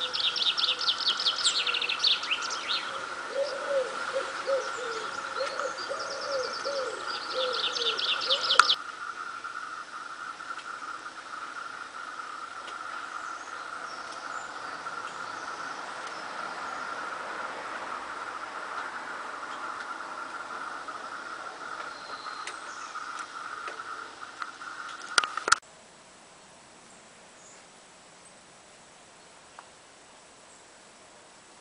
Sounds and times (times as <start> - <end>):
Outside, rural or natural: 0.0 - 31.6.